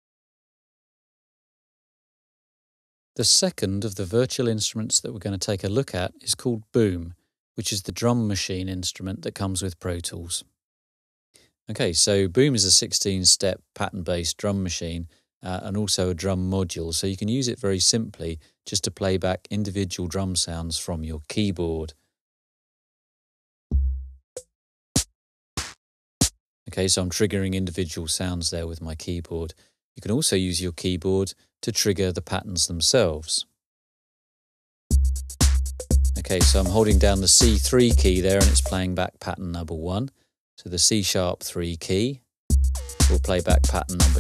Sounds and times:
Speech: 3.2s - 10.5s, 11.7s - 22.0s, 26.7s - 33.6s, 36.2s - 42.3s, 43.0s - 44.2s
Music: 23.7s - 26.4s, 34.9s - 38.8s, 42.5s - 44.2s.

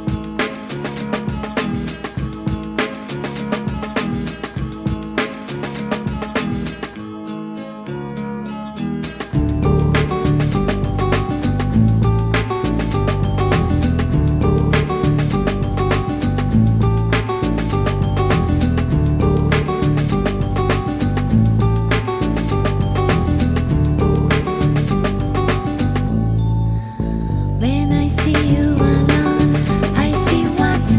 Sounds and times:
Musical instrument: 9.0s - 30.9s.

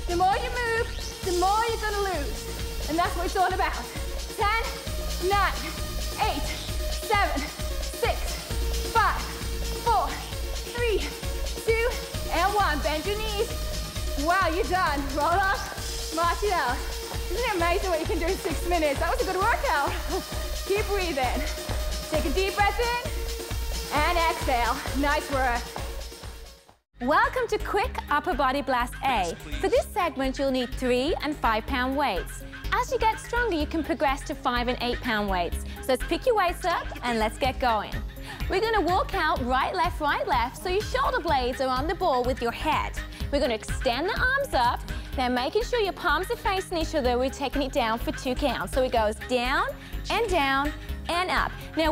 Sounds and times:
Music: 0.0s - 51.9s
Speech: 4.4s - 8.2s, 11.7s - 13.5s, 23.9s - 25.6s, 27.0s - 37.9s, 38.5s - 51.9s.

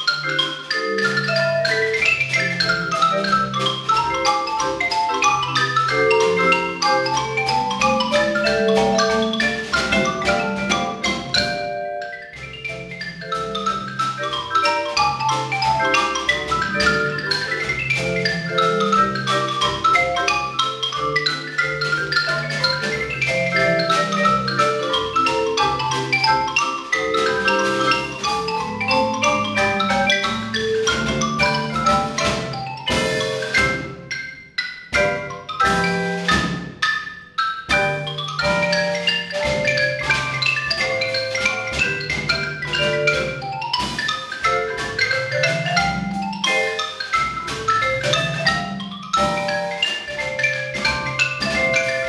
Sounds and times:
Glockenspiel: 0.0s - 52.0s
Marimba, xylophone: 0.0s - 52.0s.

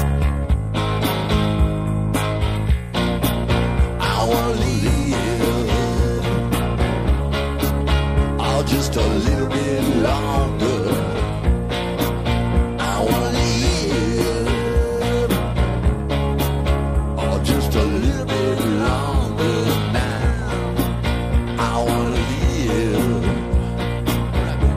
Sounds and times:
Rock music: 0.0s - 24.7s.

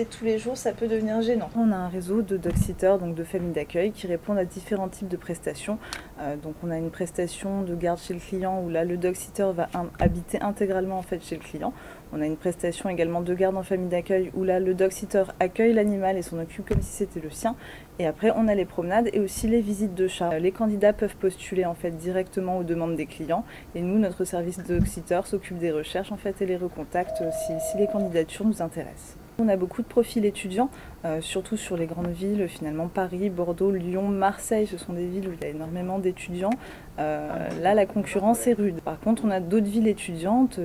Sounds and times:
Speech: 0.0s - 40.6s.

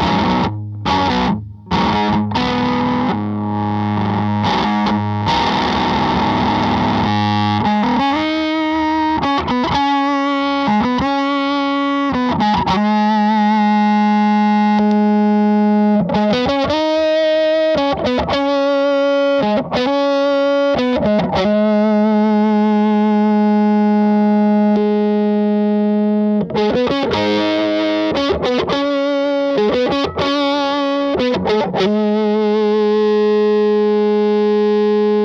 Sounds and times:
Distortion: 0.0s - 35.2s
Effects unit: 0.0s - 35.2s
Guitar: 0.0s - 35.2s.

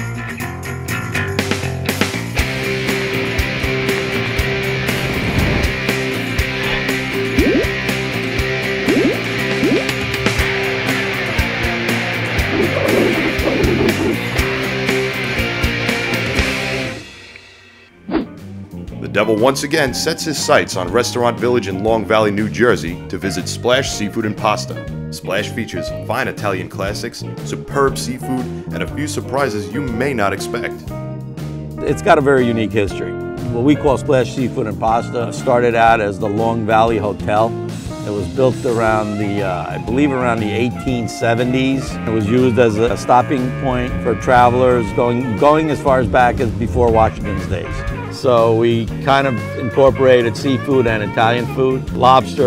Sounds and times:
Music: 0.0s - 52.4s
Speech: 19.0s - 30.8s, 31.8s - 52.4s.

